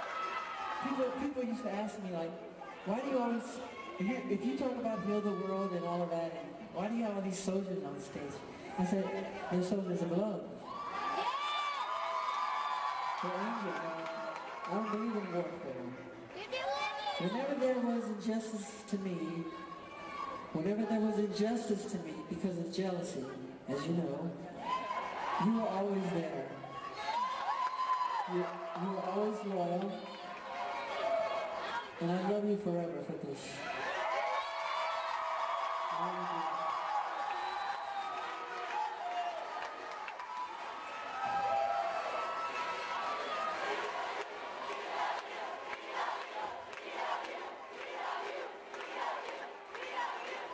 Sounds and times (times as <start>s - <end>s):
Male speech, man speaking: 0.8s - 10.6s, 13.2s - 16.0s, 17.2s - 19.6s, 20.5s - 24.4s, 25.4s - 26.6s, 28.2s - 30.1s, 32.0s - 33.6s, 36.0s - 36.5s.